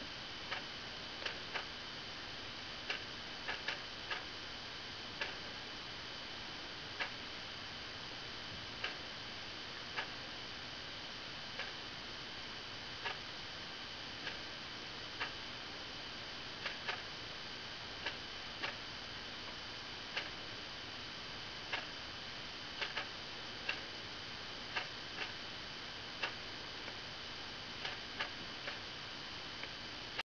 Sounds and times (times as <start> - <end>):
Tick-tock: 22.8 - 23.1, 27.8 - 28.8.